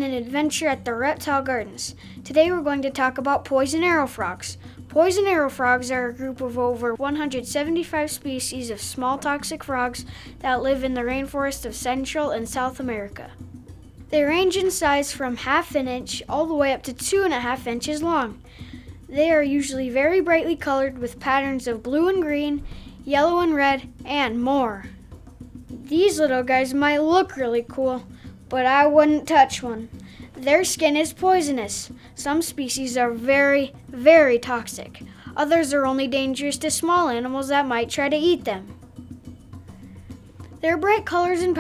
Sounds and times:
Speech: 0.0 - 13.4, 14.1 - 18.4, 19.1 - 24.9, 25.8 - 38.7, 40.6 - 41.6
Music: 0.0 - 41.6.

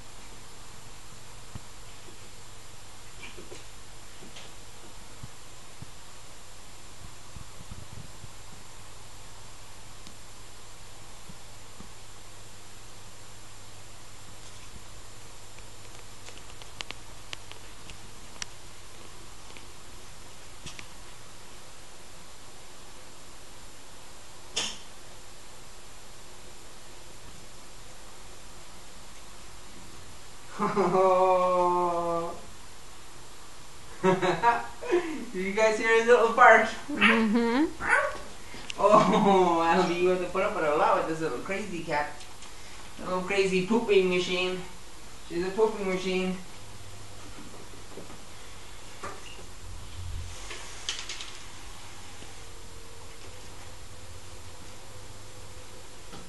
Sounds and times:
Inside, small room: 0.0 - 56.2.

